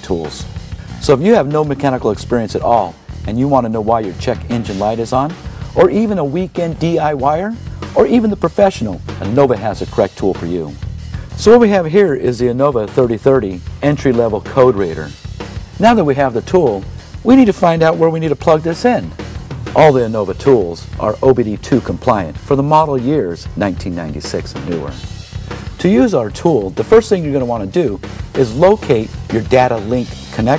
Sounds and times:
Speech: 0:00.0 - 0:10.8, 0:11.4 - 0:15.2, 0:15.8 - 0:19.1, 0:19.8 - 0:25.1, 0:25.8 - 0:30.5
Music: 0:00.0 - 0:30.5.

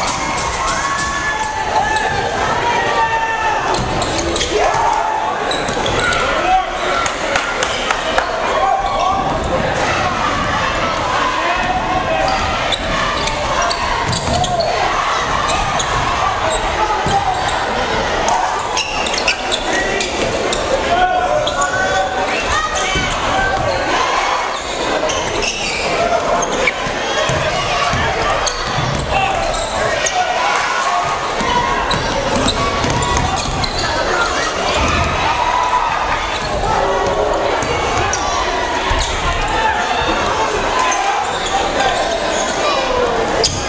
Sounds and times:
Speech: 0:00.0 - 0:43.6.

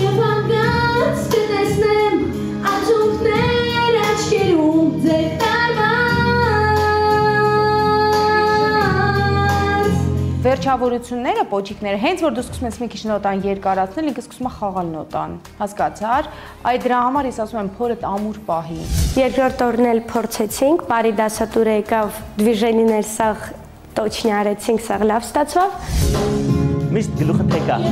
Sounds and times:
Female singing: 0:00.0 - 0:10.6
Inside, large room or hall: 0:00.0 - 0:16.2
Music: 0:00.0 - 0:27.9.

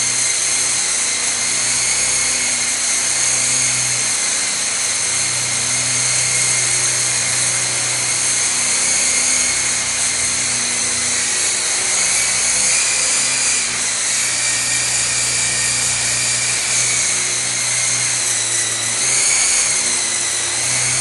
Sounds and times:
Helicopter: 0:00.0 - 0:21.0.

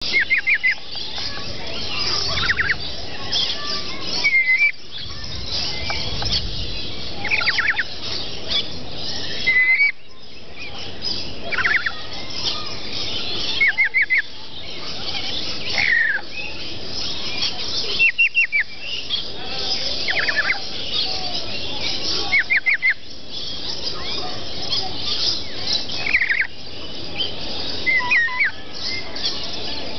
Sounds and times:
Chirp, tweet: 0:00.0 - 0:29.9
Outside, rural or natural: 0:00.0 - 0:29.9.

